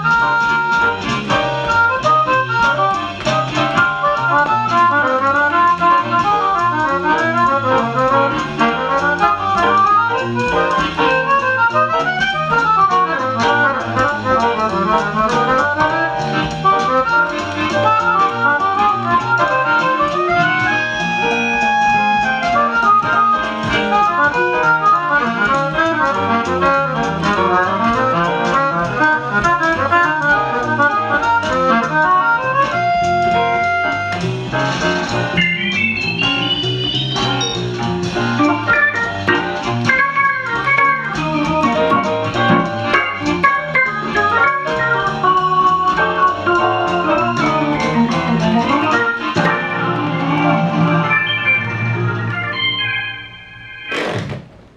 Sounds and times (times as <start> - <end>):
Accordion: 0.0 - 51.4.